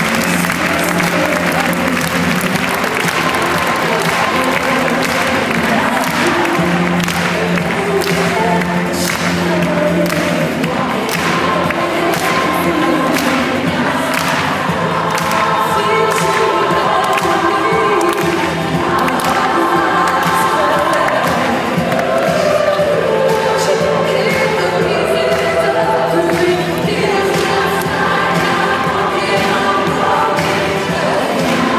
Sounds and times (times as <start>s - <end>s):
Choir: 0.0s - 31.7s.